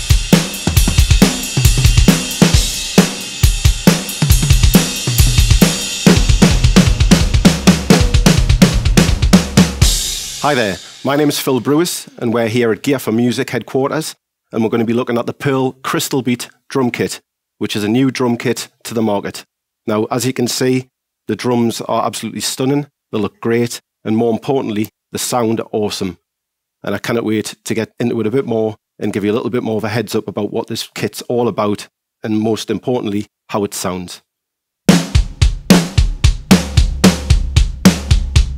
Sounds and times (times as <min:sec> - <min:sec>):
Drum: 0:00.0 - 0:11.9, 0:34.9 - 0:38.5
Drum kit: 0:00.0 - 0:12.2, 0:34.9 - 0:38.5
Speech: 0:10.4 - 0:26.2, 0:26.8 - 0:34.3.